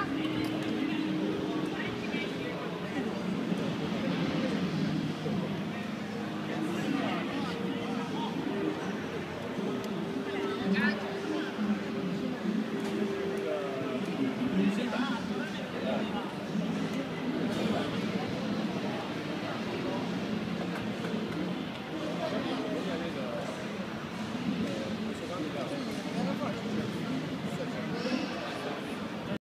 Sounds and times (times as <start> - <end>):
Speech: 0.0 - 29.4.